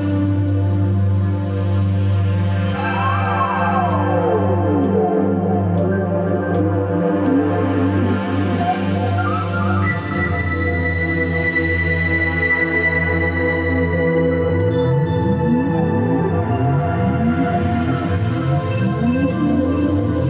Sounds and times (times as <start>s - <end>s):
Music: 0.0s - 20.3s.